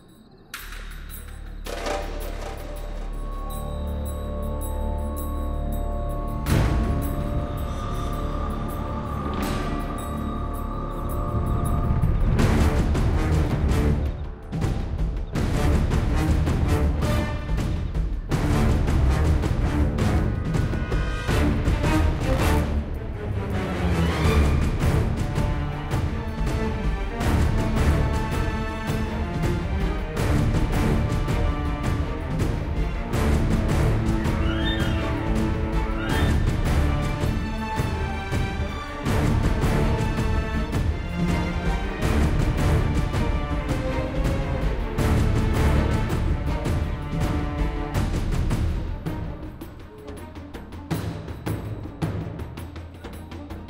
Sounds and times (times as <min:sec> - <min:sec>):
Background music: 0:00.0 - 0:53.7.